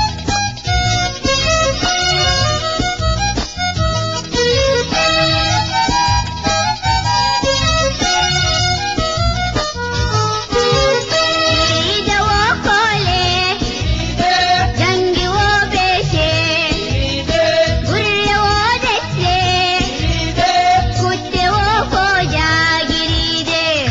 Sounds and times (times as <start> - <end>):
Folk music: 0.0 - 23.9.